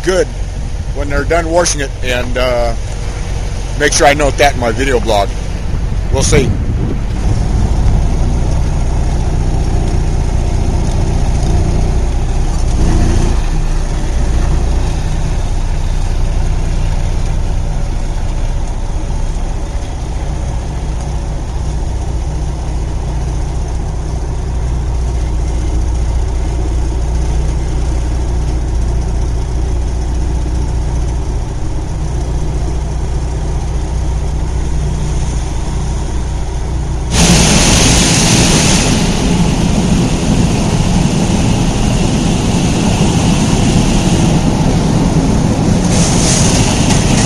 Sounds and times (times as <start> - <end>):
Car: 0.0 - 47.2.